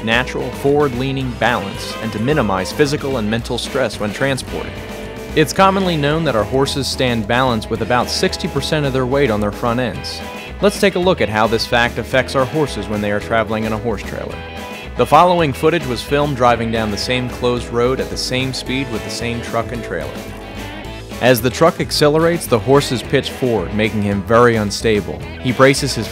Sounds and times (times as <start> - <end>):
Speech: 0.0 - 4.8, 5.4 - 14.4, 15.0 - 20.2, 21.2 - 26.1
Music: 0.0 - 26.1.